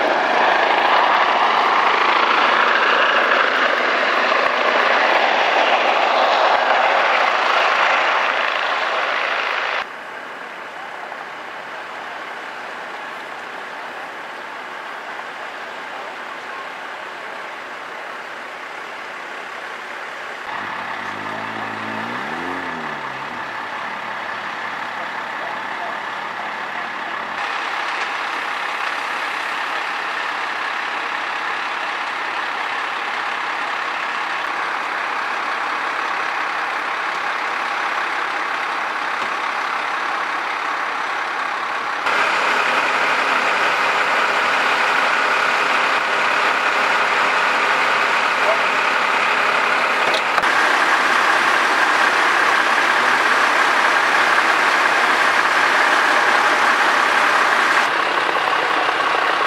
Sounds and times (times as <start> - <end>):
Helicopter: 0.0 - 21.6, 22.8 - 59.4
Truck: 0.0 - 59.4.